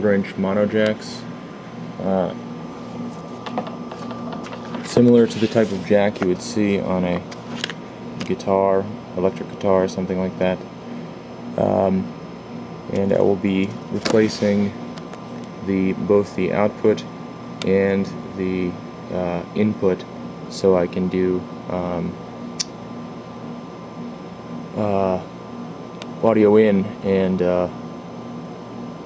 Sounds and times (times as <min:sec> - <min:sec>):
Speech: 0:00.0 - 0:01.3, 0:02.0 - 0:02.4, 0:04.8 - 0:07.3, 0:08.2 - 0:10.6, 0:11.6 - 0:12.1, 0:12.9 - 0:14.8, 0:15.6 - 0:22.2, 0:24.8 - 0:25.3, 0:26.2 - 0:27.8.